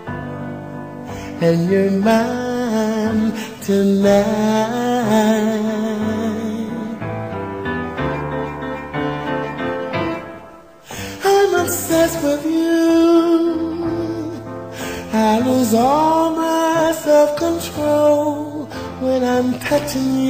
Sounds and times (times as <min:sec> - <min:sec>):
Music: 0:00.0 - 0:20.3.